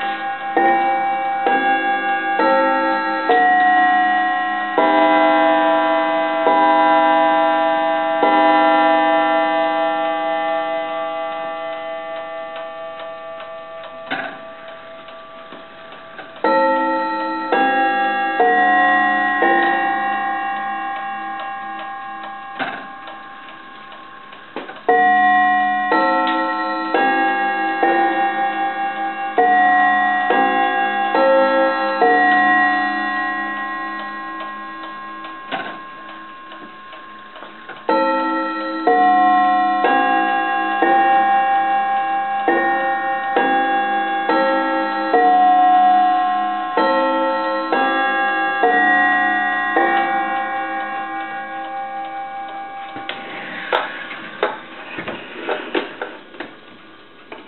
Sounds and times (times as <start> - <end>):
Tick-tock: 12.1 - 54.6.